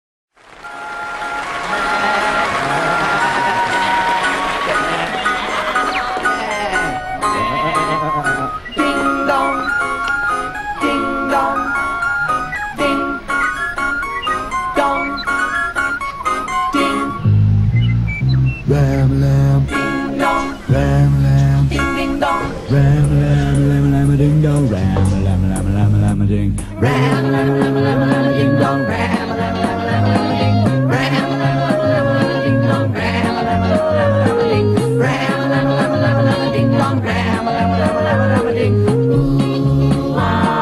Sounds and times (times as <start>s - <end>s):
Music: 0.4s - 40.6s
Ice cream truck, ice cream van: 0.6s - 25.6s.